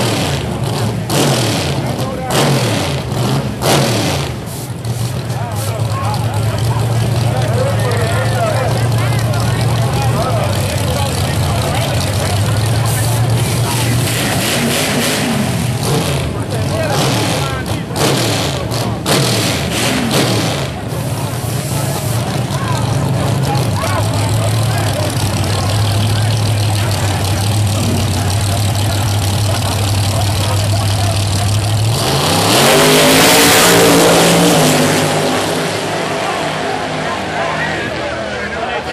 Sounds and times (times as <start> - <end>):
Car: 0.0 - 38.9
Speech: 1.7 - 2.6, 5.2 - 14.8, 16.1 - 19.1, 20.6 - 32.1, 36.0 - 38.9.